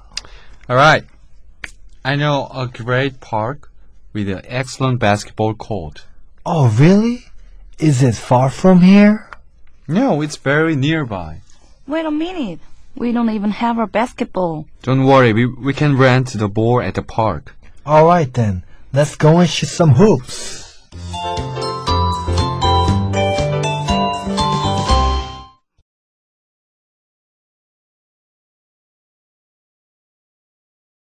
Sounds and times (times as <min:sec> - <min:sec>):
Speech: 0:00.7 - 0:01.1, 0:02.1 - 0:09.3, 0:09.9 - 0:20.7
Music: 0:20.9 - 0:25.7.